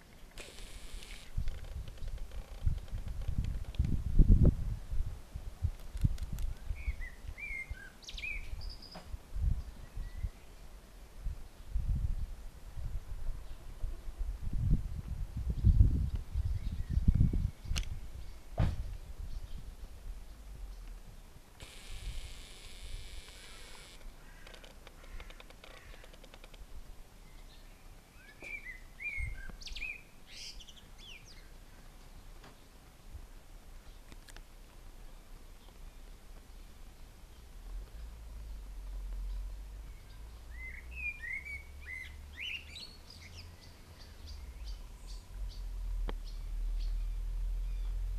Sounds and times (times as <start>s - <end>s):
Bird vocalization, bird call, bird song: 6.5s - 10.7s, 15.6s - 20.9s, 27.2s - 31.9s, 38.8s - 48.1s.